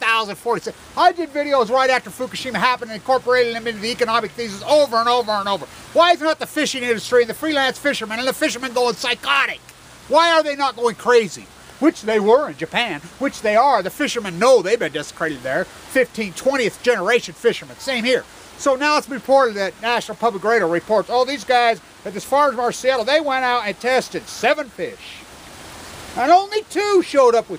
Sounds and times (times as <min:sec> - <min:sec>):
Speech: 0:00.0 - 0:25.2, 0:26.2 - 0:27.5.